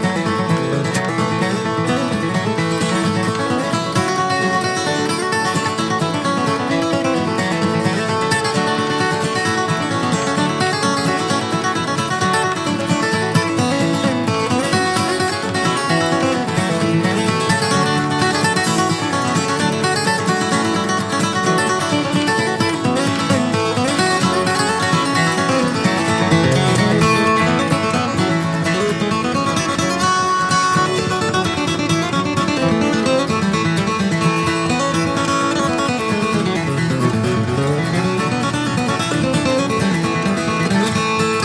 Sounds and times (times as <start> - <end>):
Music: 0.0 - 41.4.